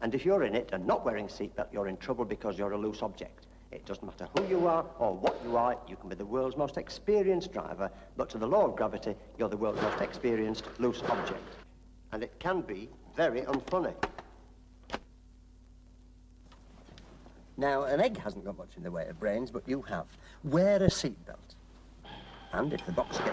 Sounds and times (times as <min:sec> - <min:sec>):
Speech: 0:00.0 - 0:14.0, 0:17.6 - 0:21.6, 0:22.6 - 0:23.3.